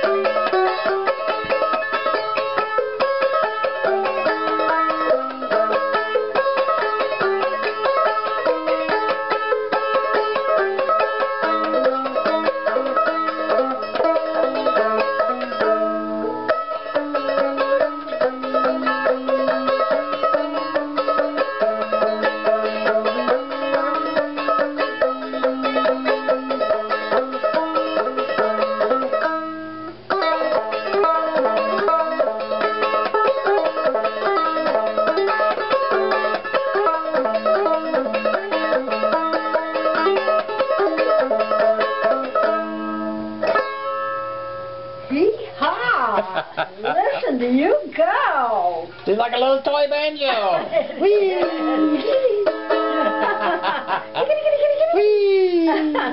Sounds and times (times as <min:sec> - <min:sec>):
Banjo: 0:00.0 - 0:47.6, 0:50.5 - 0:55.0
Inside, small room: 0:00.0 - 0:56.1
Speech: 0:45.1 - 0:52.2, 0:54.9 - 0:56.1.